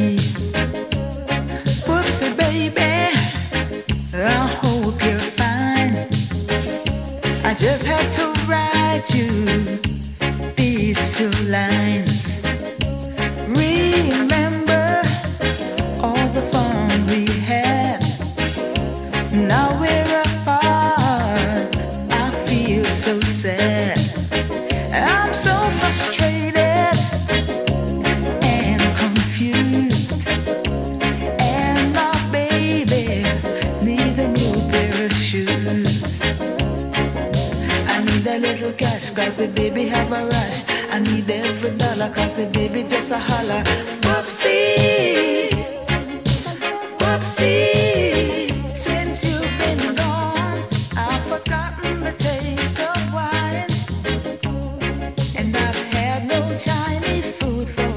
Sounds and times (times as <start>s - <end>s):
Music: 0.0s - 57.9s.